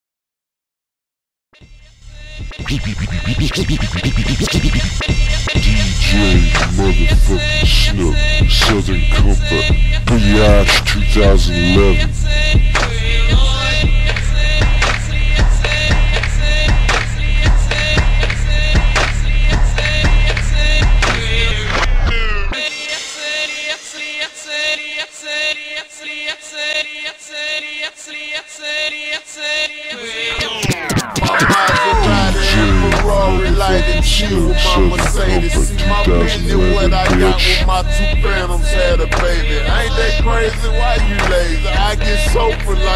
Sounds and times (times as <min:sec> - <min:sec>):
Rapping: 0:02.4 - 0:42.9.